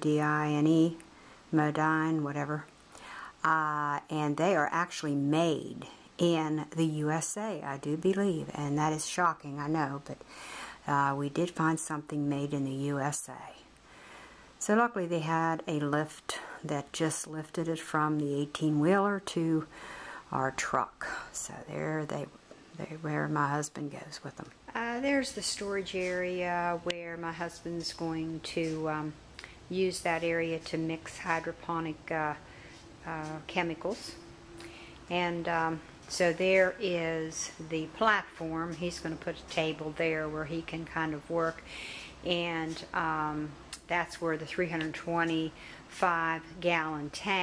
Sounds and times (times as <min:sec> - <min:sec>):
Speech: 0:00.0 - 0:02.7, 0:03.4 - 0:10.2, 0:10.8 - 0:13.7, 0:14.6 - 0:19.7, 0:20.3 - 0:32.4, 0:33.0 - 0:34.2, 0:35.1 - 0:47.4.